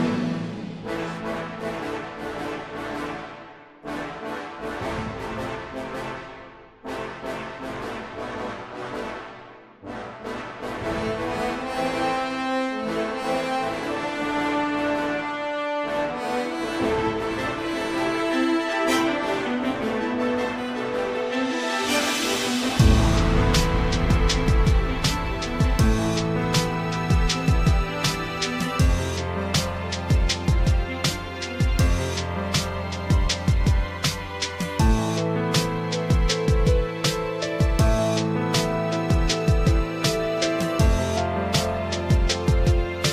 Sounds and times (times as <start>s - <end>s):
Music: 0.0s - 43.1s.